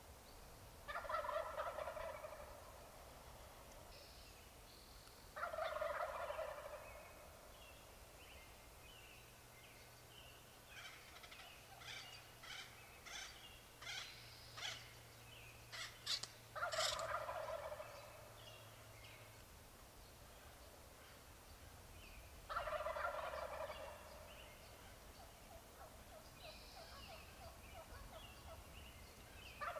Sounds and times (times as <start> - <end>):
Gobble: 0.9 - 2.7, 5.4 - 7.0, 15.8 - 18.1, 22.5 - 24.3, 25.5 - 28.6.